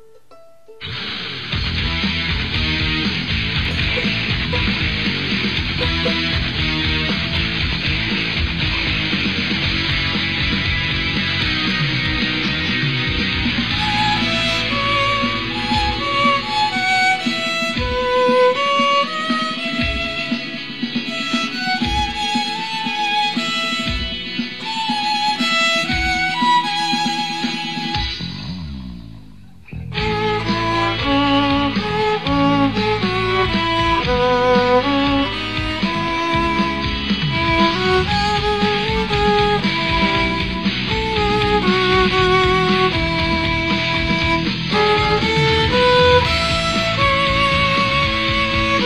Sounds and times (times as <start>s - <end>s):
Violin, fiddle: 0.8s - 8.0s, 13.1s - 28.3s, 29.8s - 48.8s.